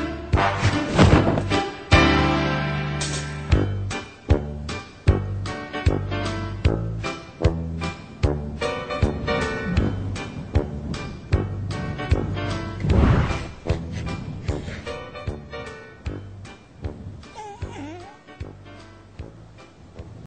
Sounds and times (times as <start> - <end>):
Music: 0.0 - 20.2.